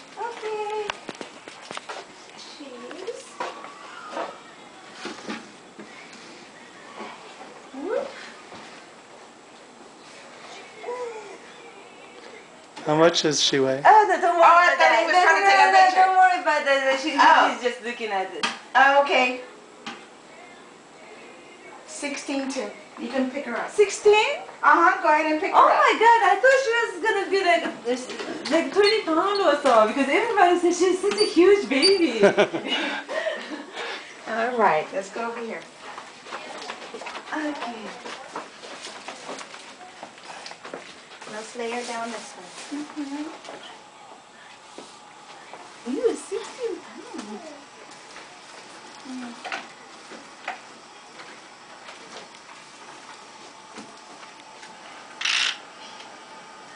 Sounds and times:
Inside, small room: 0.0 - 56.7.

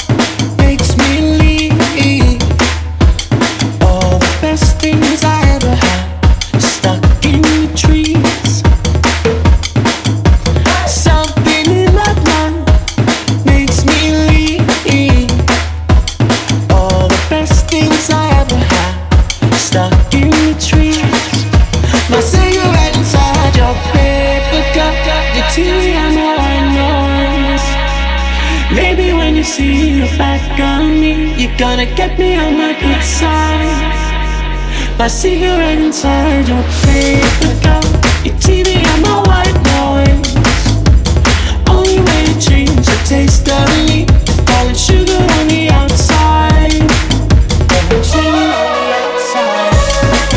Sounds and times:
Music: 0.0 - 50.3.

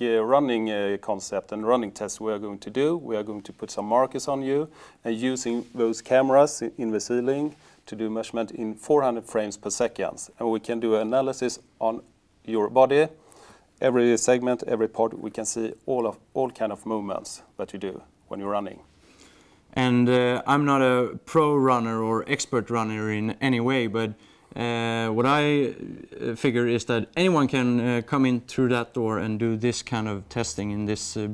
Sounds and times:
Speech: 0.0 - 13.2, 13.8 - 18.9, 19.8 - 31.3
Inside, small room: 0.0 - 31.3.

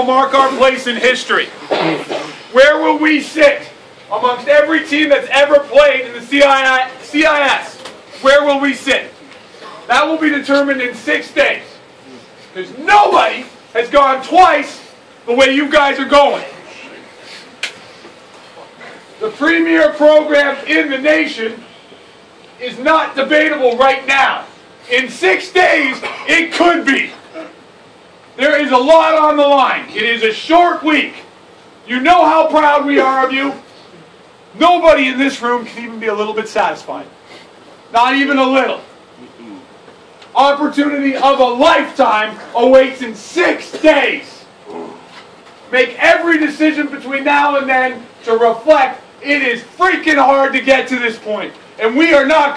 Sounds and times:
Male speech, man speaking: 0.0 - 9.2, 9.8 - 11.8, 12.6 - 16.9, 19.2 - 21.6, 22.6 - 27.2, 28.4 - 31.3, 31.9 - 33.7, 34.6 - 37.1, 37.9 - 39.7, 40.4 - 44.9, 45.7 - 52.5
Narration, monologue: 0.0 - 52.5.

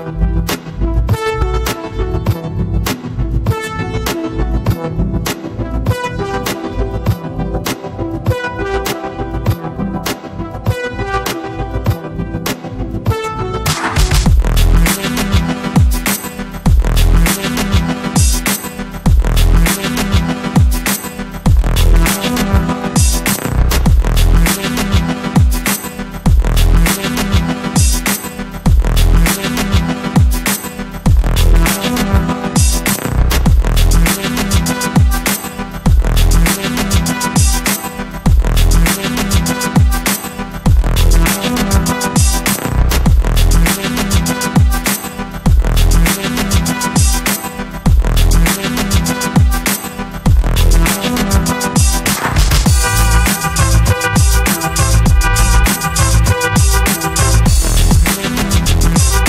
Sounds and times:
Soundtrack music: 0.0 - 59.2.

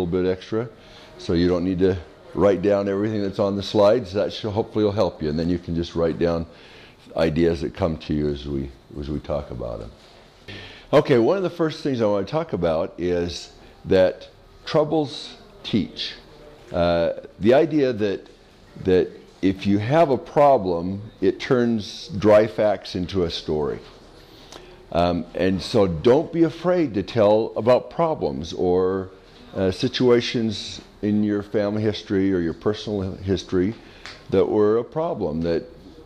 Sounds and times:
Speech: 0.0 - 10.1, 10.9 - 24.0, 24.9 - 36.0.

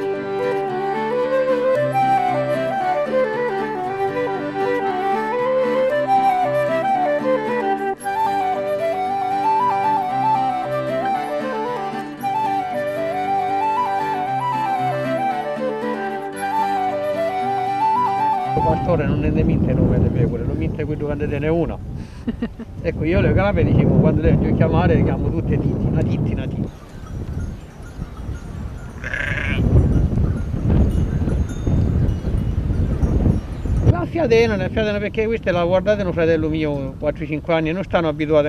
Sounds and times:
Flute: 0.0 - 20.2.

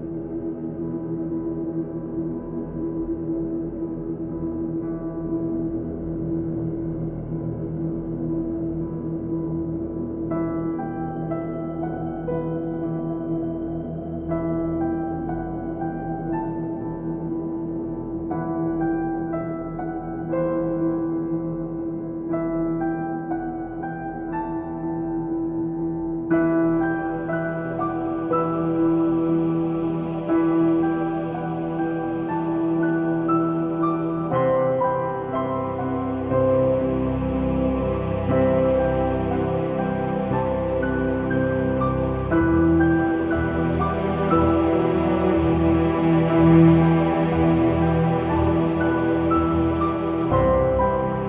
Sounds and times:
Soul music: 26.4 - 51.2.

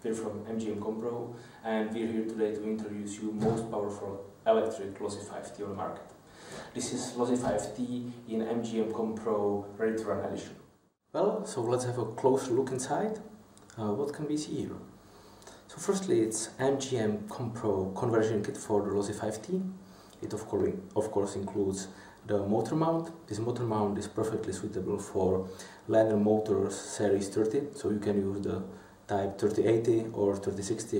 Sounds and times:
Speech: 0.0 - 6.1, 6.7 - 14.9, 15.7 - 30.9.

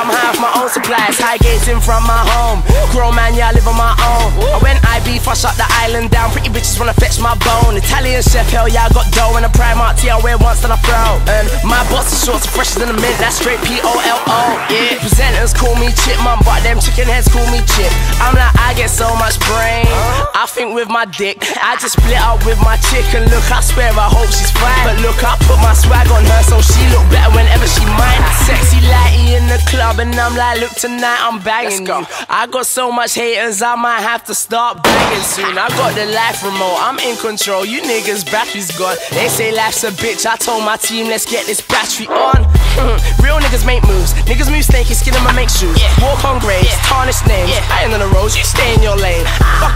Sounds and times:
Music: 0.0 - 49.7.

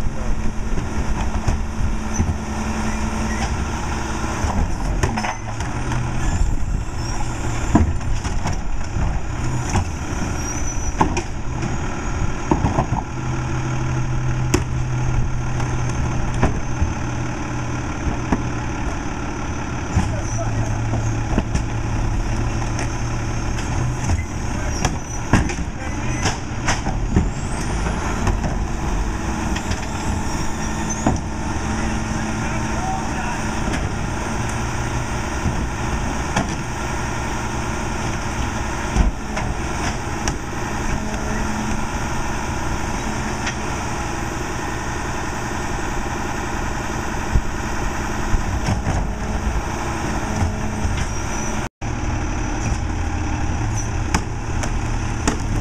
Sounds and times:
Vehicle: 0.0 - 55.6.

